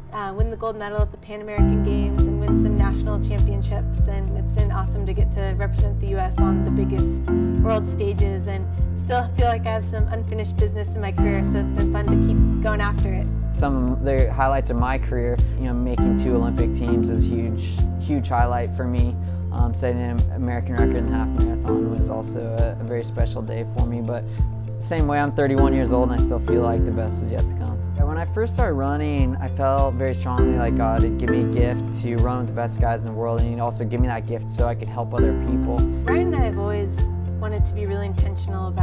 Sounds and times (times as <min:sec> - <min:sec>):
Music: 0:00.0 - 0:38.8
Speech: 0:00.2 - 0:24.2, 0:24.8 - 0:38.8.